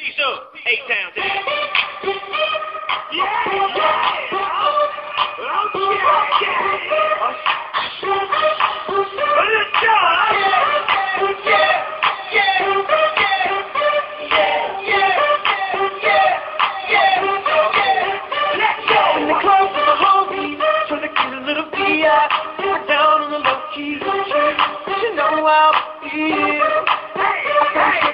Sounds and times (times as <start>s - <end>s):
Music: 1.1s - 28.1s.